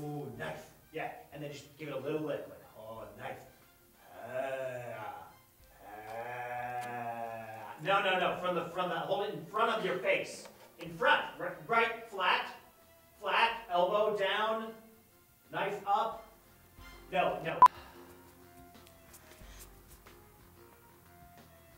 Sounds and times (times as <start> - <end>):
Music: 0.0 - 21.7
Speech: 7.8 - 12.6, 13.2 - 14.8, 15.5 - 16.2.